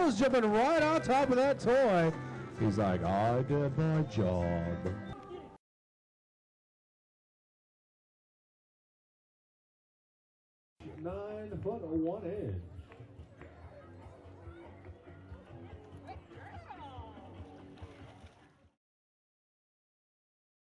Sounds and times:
Music: 0.0s - 5.6s, 10.8s - 18.8s
Speech: 0.0s - 5.6s, 10.8s - 12.7s.

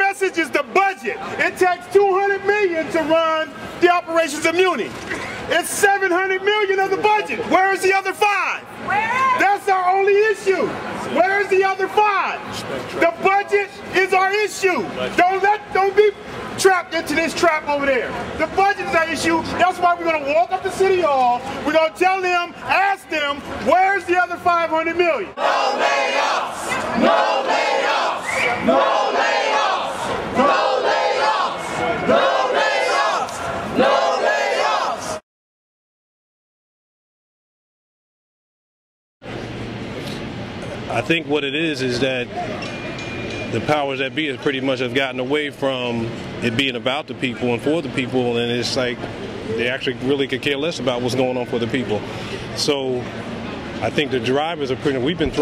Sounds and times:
Speech: 0.0s - 25.4s, 40.7s - 42.6s, 43.5s - 53.2s, 53.8s - 55.4s
Outside, urban or manmade: 0.0s - 35.2s, 39.2s - 55.4s.

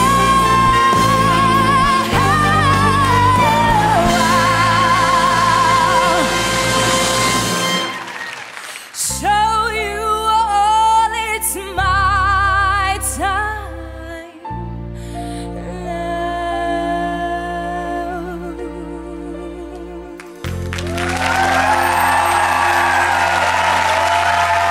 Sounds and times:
Music: 0.0s - 24.7s.

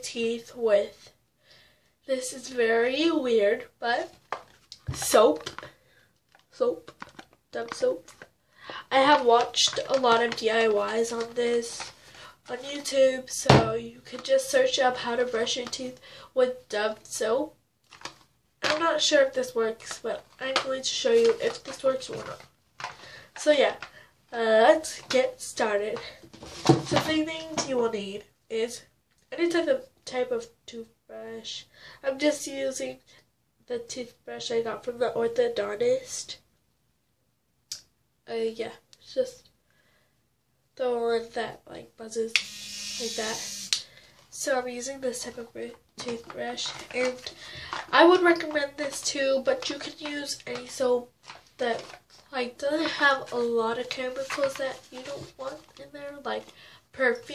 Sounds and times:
Speech: 0.0s - 1.2s, 2.1s - 4.2s, 4.9s - 5.6s, 6.6s - 6.9s, 7.6s - 8.1s, 8.9s - 11.9s, 12.5s - 17.6s, 18.6s - 22.4s, 23.4s - 26.2s, 27.0s - 33.0s, 33.7s - 36.4s, 38.3s - 39.5s, 40.8s - 42.4s, 44.3s - 57.3s.

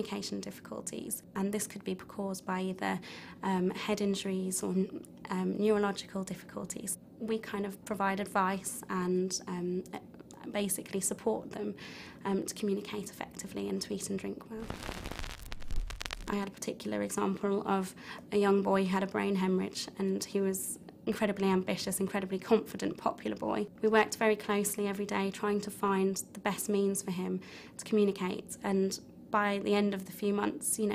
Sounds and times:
Female speech, woman speaking: 0.0s - 14.7s, 16.3s - 30.9s.

